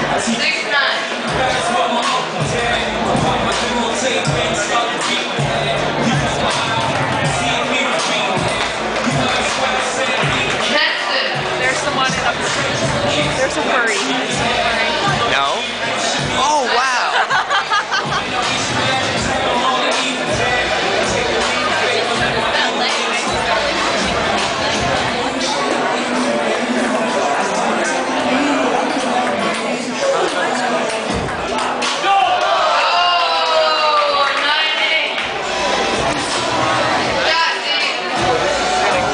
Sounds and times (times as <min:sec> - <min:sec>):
Music: 0:00.0 - 0:39.1
Speech: 0:10.6 - 0:17.4, 0:19.2 - 0:32.4.